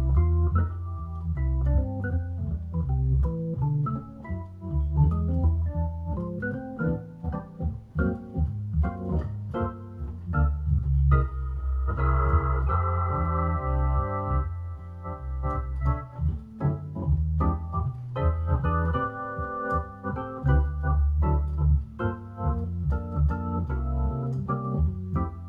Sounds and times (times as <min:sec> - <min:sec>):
Electronic organ: 0:00.0 - 0:25.4.